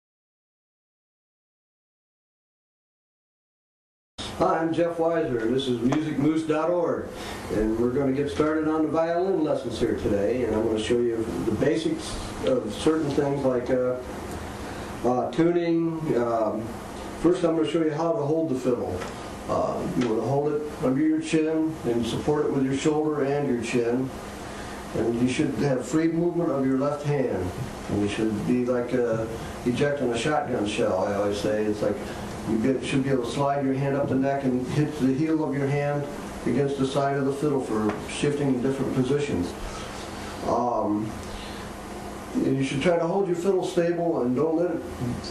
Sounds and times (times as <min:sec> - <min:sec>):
Speech: 0:04.2 - 0:14.1, 0:15.0 - 0:24.2, 0:24.9 - 0:39.6, 0:40.4 - 0:41.2, 0:42.3 - 0:45.3.